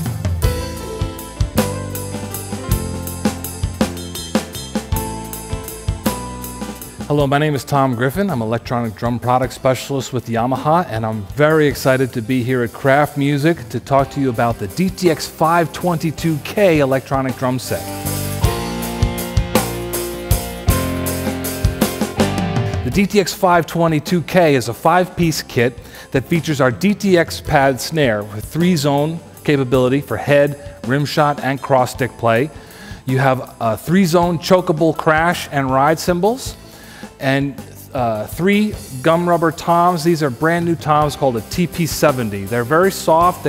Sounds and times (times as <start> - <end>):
Drum kit: 0.0 - 43.4.